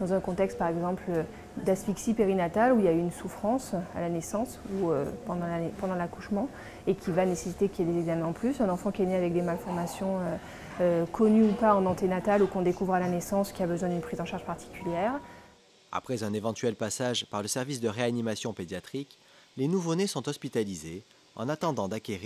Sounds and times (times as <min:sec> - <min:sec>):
Speech: 0:00.0 - 0:15.2, 0:16.0 - 0:22.2.